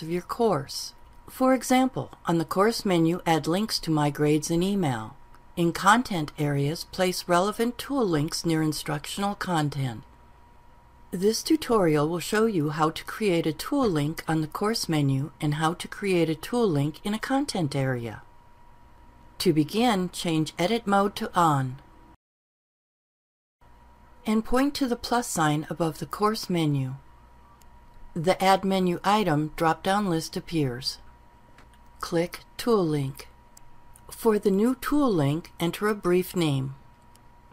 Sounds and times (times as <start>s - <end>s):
Narration, monologue: 0.0s - 22.2s, 23.7s - 37.5s.